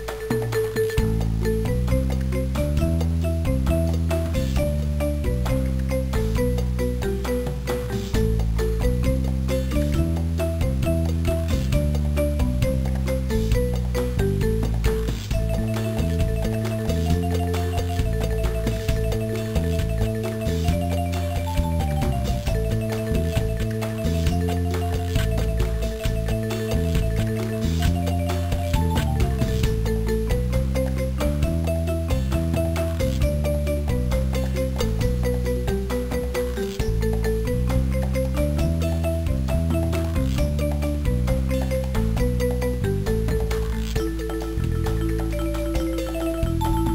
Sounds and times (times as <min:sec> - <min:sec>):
Video game music: 0:00.0 - 0:46.9.